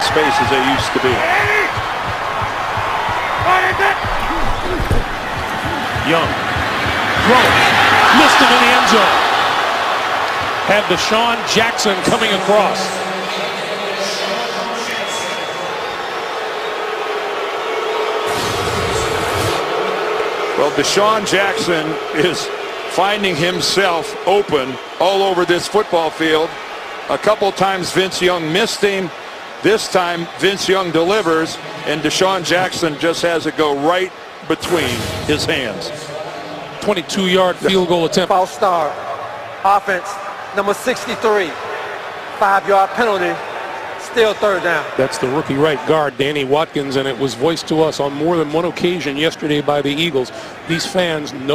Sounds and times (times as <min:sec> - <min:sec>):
Speech: 0:10.6 - 0:15.8, 0:20.6 - 0:26.5, 0:39.6 - 0:41.6, 0:42.4 - 0:43.4, 0:44.0 - 0:51.5.